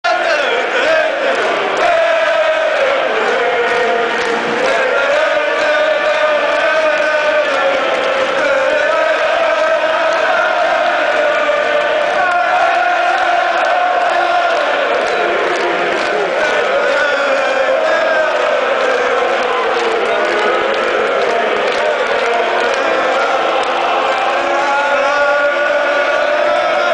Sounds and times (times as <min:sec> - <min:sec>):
Singing: 0:00.0 - 0:26.9.